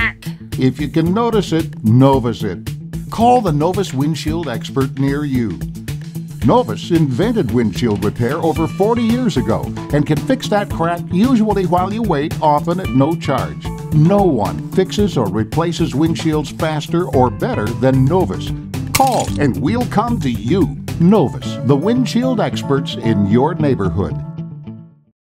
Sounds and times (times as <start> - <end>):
Speech: 0.0 - 5.6, 6.4 - 24.2
Music: 0.0 - 25.2.